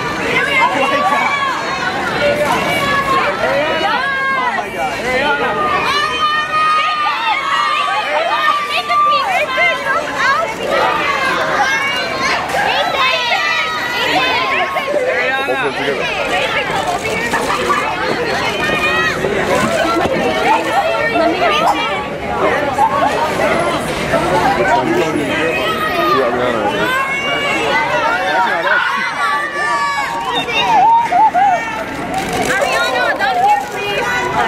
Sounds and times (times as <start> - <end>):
Outside, urban or manmade: 0.0 - 34.4.